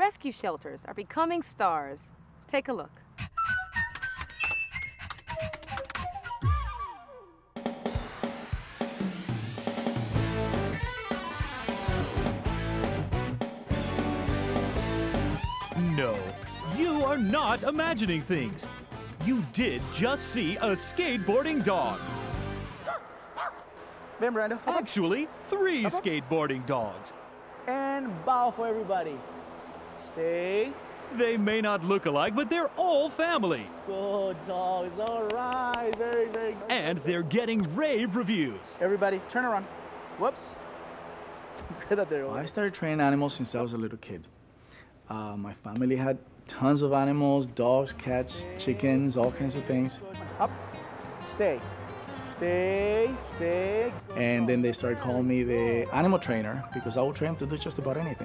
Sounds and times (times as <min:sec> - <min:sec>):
Music: 0:03.2 - 0:22.9, 0:47.5 - 0:58.2
Bow-wow: 0:22.8 - 0:23.7
Speech: 0:24.2 - 0:27.1, 0:30.1 - 0:40.6, 0:41.7 - 0:44.3, 0:45.1 - 0:50.2, 0:52.4 - 0:58.2.